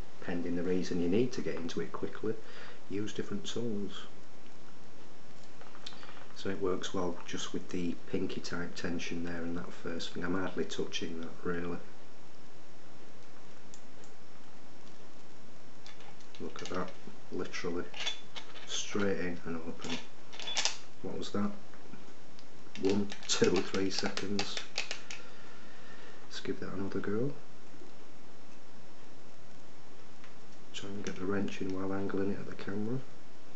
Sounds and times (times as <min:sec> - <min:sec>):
Speech: 0:00.2 - 0:04.2, 0:06.4 - 0:11.9, 0:16.4 - 0:18.0, 0:18.6 - 0:20.0, 0:21.0 - 0:21.6, 0:22.8 - 0:24.8, 0:26.3 - 0:27.4, 0:30.7 - 0:33.1.